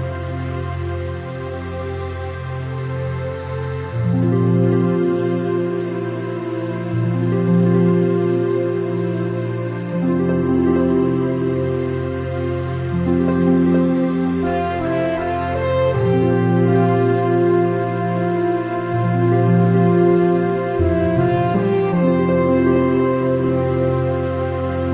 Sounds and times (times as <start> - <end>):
Background music: 0.0 - 24.9
Soundtrack music: 0.0 - 24.9.